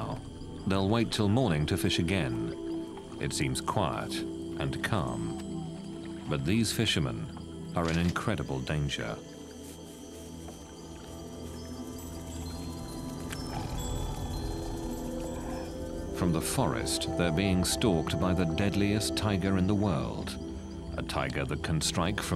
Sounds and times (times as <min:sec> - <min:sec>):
Speech: 0:00.0 - 0:02.6, 0:03.2 - 0:05.4, 0:06.3 - 0:09.2, 0:16.2 - 0:20.4, 0:21.0 - 0:22.3
Music: 0:00.0 - 0:22.3
Roaring cats (lions, tigers): 0:13.2 - 0:16.2.